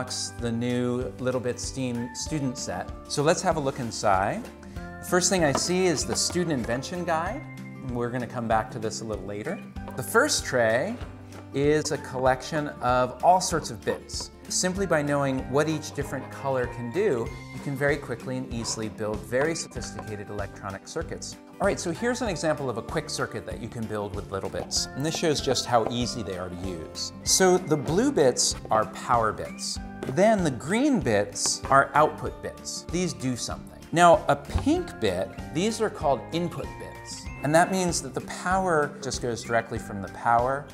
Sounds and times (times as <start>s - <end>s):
Speech: 0.0s - 4.5s, 5.1s - 40.7s
Music: 0.0s - 40.7s.